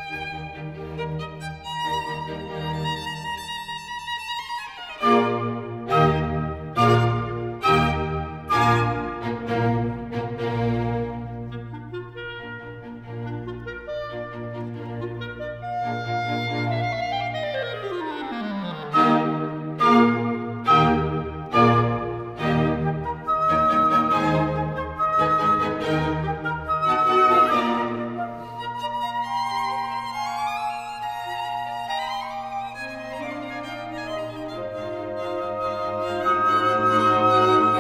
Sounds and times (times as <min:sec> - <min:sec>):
Violin, fiddle: 0:00.0 - 0:37.8.